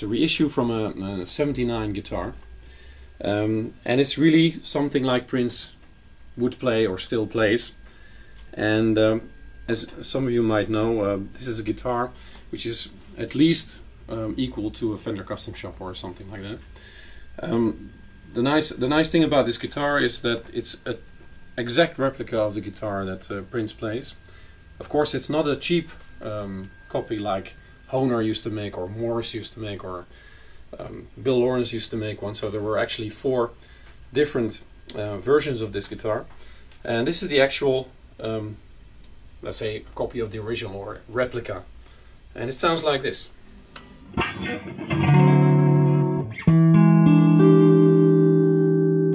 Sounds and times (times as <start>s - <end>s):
Speech: 0.0s - 2.4s, 3.2s - 5.8s, 6.4s - 7.8s, 8.5s - 16.7s, 17.4s - 24.2s, 24.8s - 30.1s, 30.7s - 38.6s, 39.4s - 41.7s, 42.3s - 43.4s.